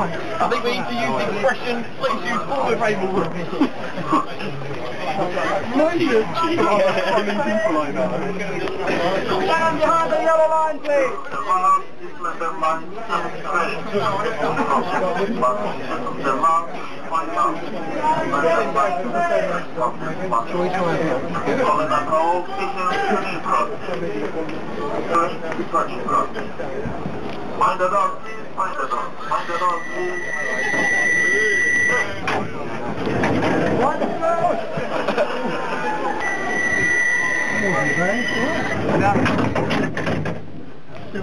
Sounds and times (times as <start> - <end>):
Speech: 0.0 - 35.0.